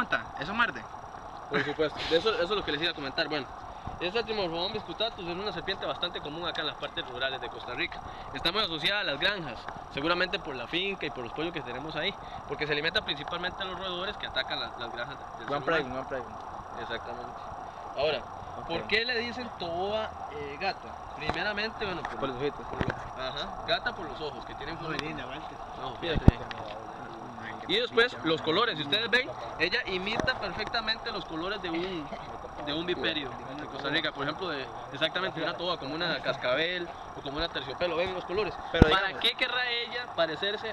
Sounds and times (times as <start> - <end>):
Outside, rural or natural: 0.0 - 40.7.